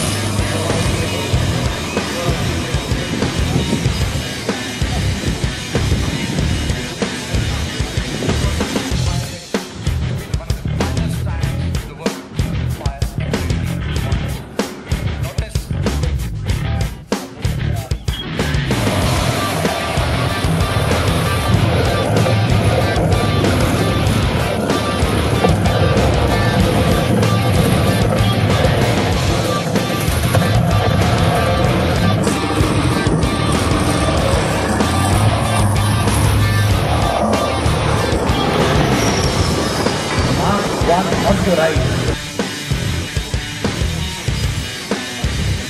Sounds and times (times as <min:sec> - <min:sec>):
Music: 0:00.0 - 0:45.6
Speech: 0:00.4 - 0:03.7, 0:08.3 - 0:09.6, 0:10.2 - 0:14.4, 0:15.2 - 0:15.7, 0:16.6 - 0:18.1, 0:40.4 - 0:42.1.